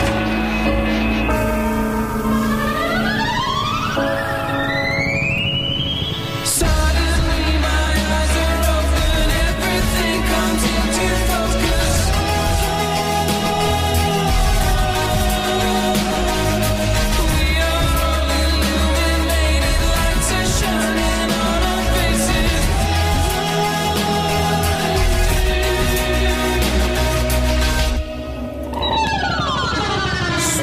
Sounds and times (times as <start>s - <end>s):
Music: 0.0s - 30.6s.